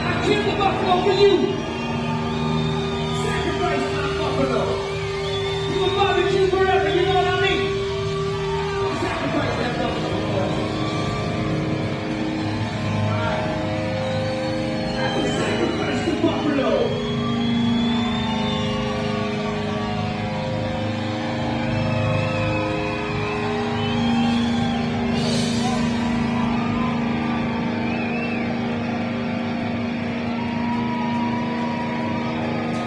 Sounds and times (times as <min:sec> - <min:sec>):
Music: 0:00.0 - 0:32.8.